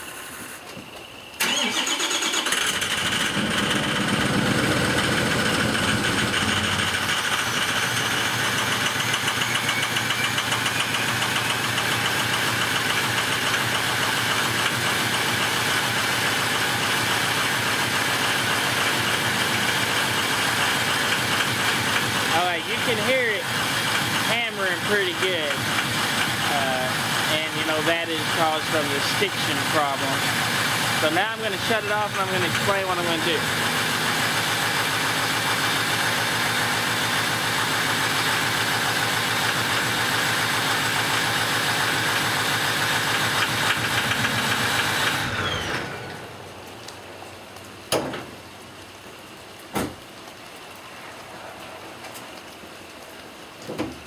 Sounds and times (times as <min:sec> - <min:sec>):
Car: 0:00.0 - 0:50.1
Engine starting: 0:01.4 - 0:07.4, 0:43.4 - 0:46.2.